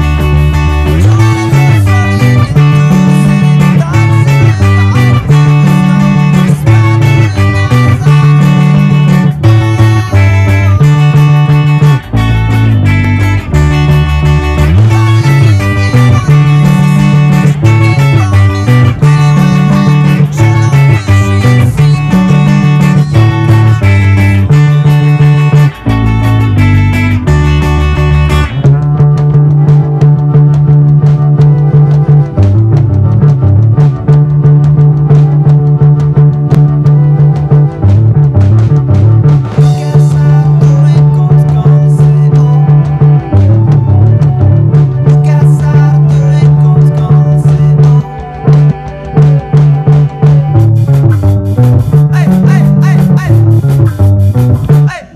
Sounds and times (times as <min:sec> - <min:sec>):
Bass guitar: 0:00.0 - 0:55.1
Strum: 0:00.0 - 0:55.1.